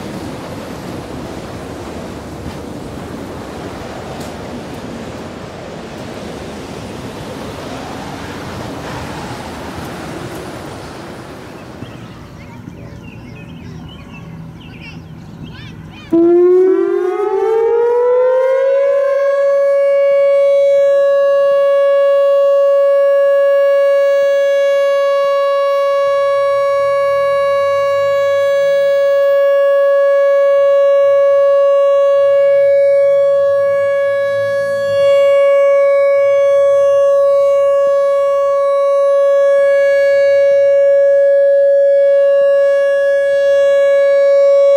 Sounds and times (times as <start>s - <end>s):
Civil defense siren: 0.0s - 11.8s, 16.1s - 44.7s.